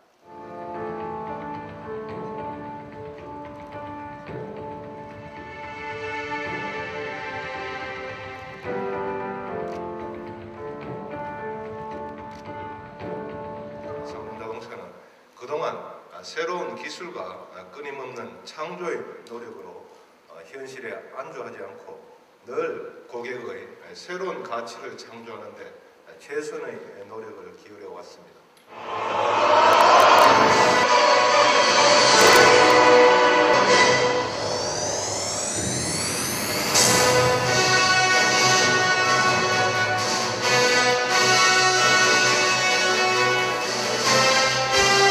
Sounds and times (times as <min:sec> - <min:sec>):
Speech: 0:14.1 - 0:28.4.